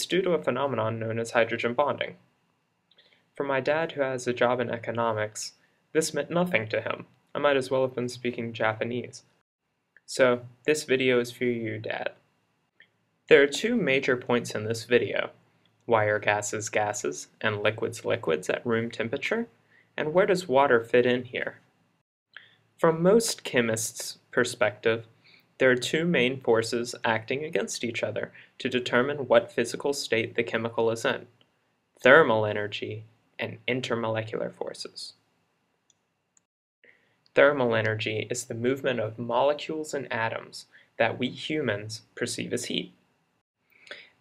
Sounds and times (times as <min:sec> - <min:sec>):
Speech: 0:00.0 - 0:02.2, 0:03.4 - 0:09.4, 0:10.1 - 0:12.2, 0:13.3 - 0:21.7, 0:22.8 - 0:31.4, 0:32.0 - 0:35.2, 0:37.4 - 0:43.0.